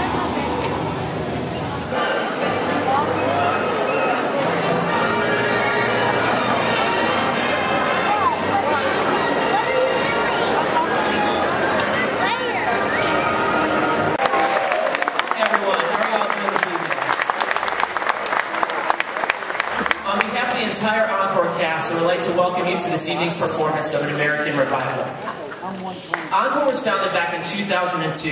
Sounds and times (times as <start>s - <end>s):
Applause: 14.2s - 20.4s, 26.1s - 26.3s.